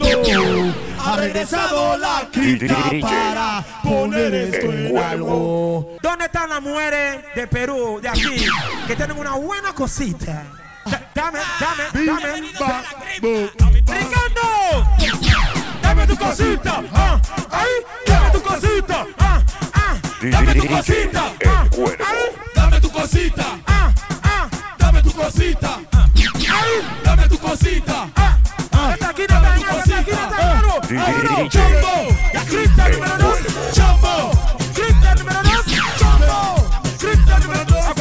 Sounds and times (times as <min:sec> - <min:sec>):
Music: 0:00.0 - 0:06.0, 0:07.2 - 0:09.5, 0:12.0 - 0:38.0.